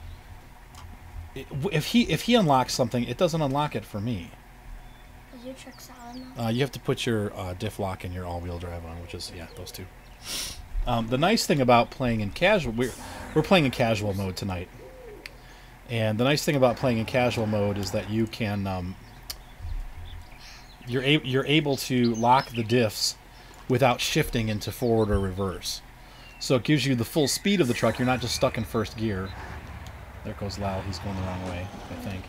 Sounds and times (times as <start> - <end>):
Outside, rural or natural: 0.0 - 32.2
Speech: 1.4 - 4.4, 5.4 - 9.9, 10.9 - 14.7, 15.9 - 19.0, 20.9 - 25.8, 26.4 - 29.4, 30.2 - 32.2.